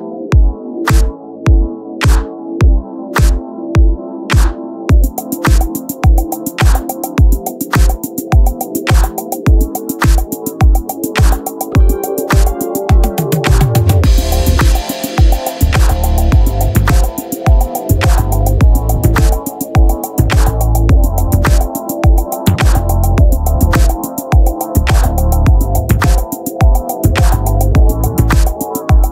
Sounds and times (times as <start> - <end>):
Music: 0.0 - 29.1.